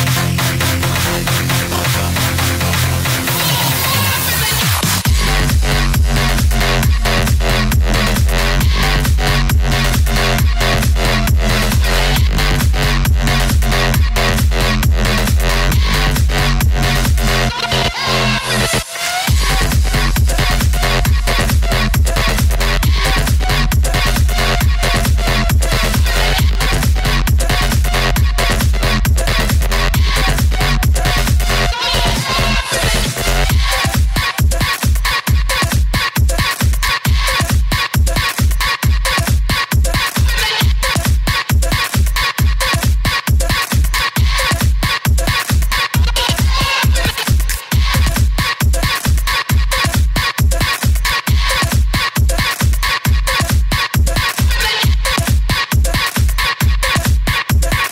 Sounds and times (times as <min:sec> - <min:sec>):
Dubstep: 0:00.0 - 0:57.9
Electronic dance music: 0:00.0 - 0:57.9
Trance music: 0:00.0 - 0:57.9.